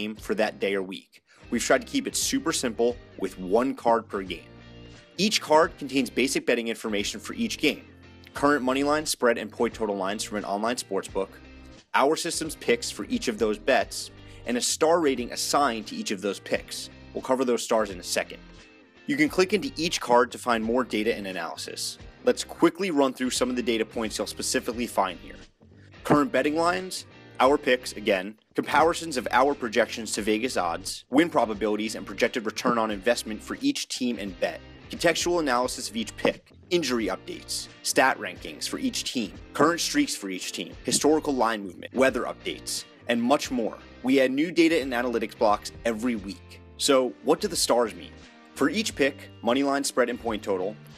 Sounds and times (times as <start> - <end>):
Speech: 0.0 - 4.4, 5.2 - 18.4, 19.1 - 25.4, 26.0 - 50.8
Music: 0.0 - 50.9.